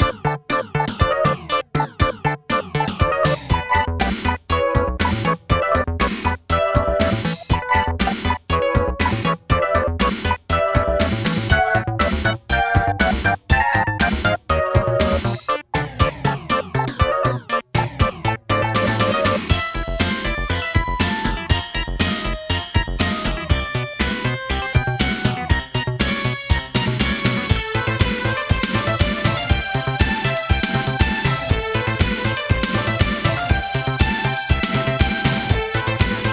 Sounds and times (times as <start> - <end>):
Music: 0.0 - 36.3.